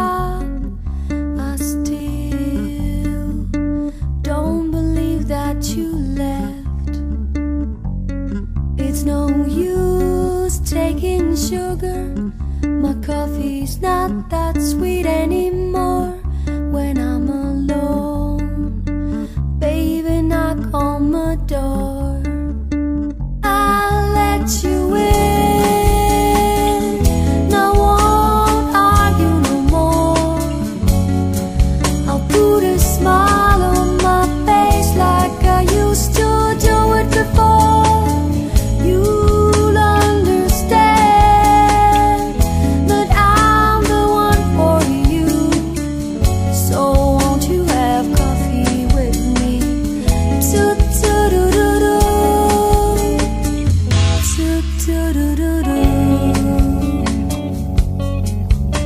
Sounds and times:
Music: 0.0s - 58.8s.

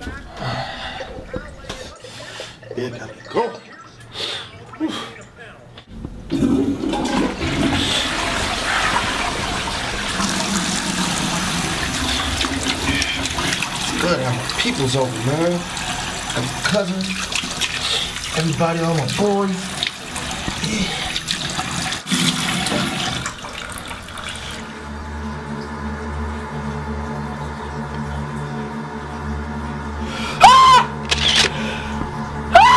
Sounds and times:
Sink (filling or washing): 0.0s - 4.8s, 6.3s - 25.5s
Water: 0.0s - 31.1s
Water tap, faucet: 6.8s - 25.0s.

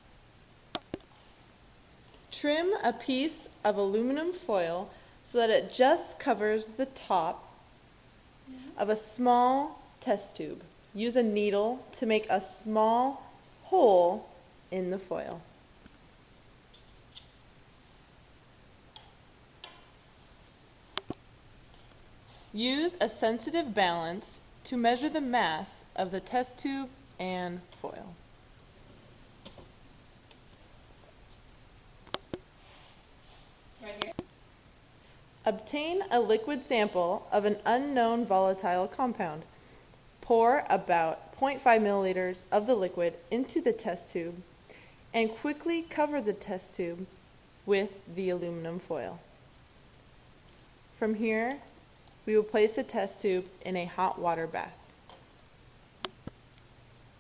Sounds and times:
Speech: 2.3s - 7.5s, 8.5s - 15.5s, 22.6s - 28.2s, 33.8s - 34.2s, 35.5s - 39.5s, 40.2s - 44.5s, 45.2s - 47.1s, 47.7s - 49.2s, 51.0s - 51.7s, 52.3s - 54.8s.

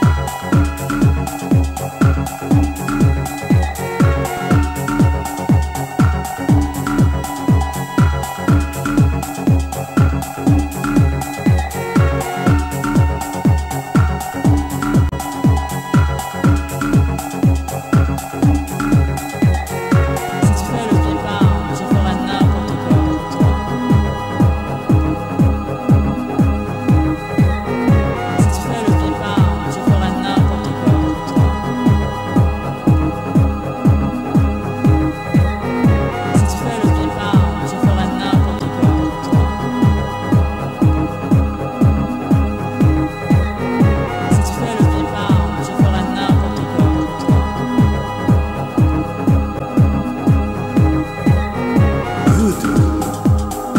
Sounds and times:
Music: 0.0s - 53.7s.

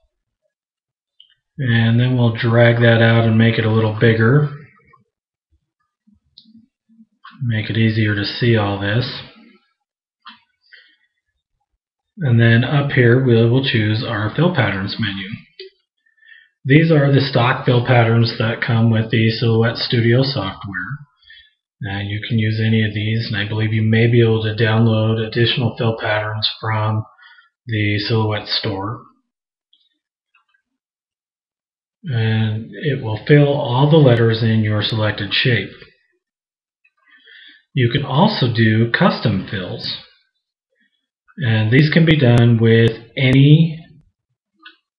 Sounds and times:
Speech: 1.6s - 4.9s, 7.3s - 9.5s, 12.2s - 15.7s, 16.7s - 21.2s, 21.8s - 29.2s, 32.0s - 36.0s, 37.6s - 40.1s, 41.3s - 44.0s.

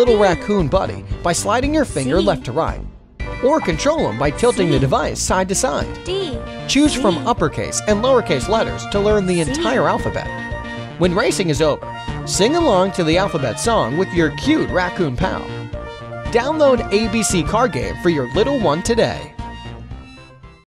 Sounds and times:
Speech: 0.0s - 2.8s, 3.4s - 10.3s, 11.0s - 15.5s, 16.3s - 19.3s
Music: 0.0s - 20.6s.

